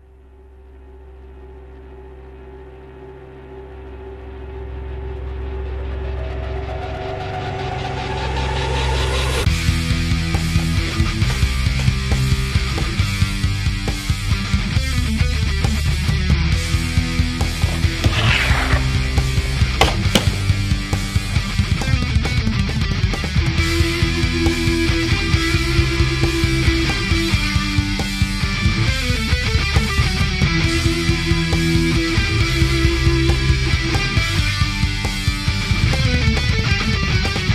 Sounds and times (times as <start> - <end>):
Music: 0.0 - 37.5.